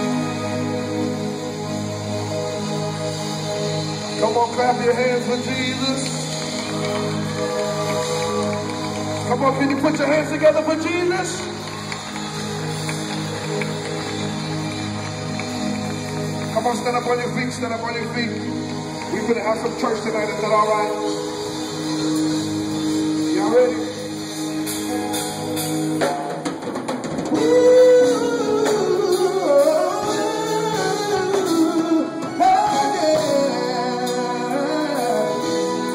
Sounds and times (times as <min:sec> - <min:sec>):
Music: 0:00.0 - 0:35.9
Speech: 0:09.3 - 0:11.5, 0:16.6 - 0:18.4, 0:19.1 - 0:21.0.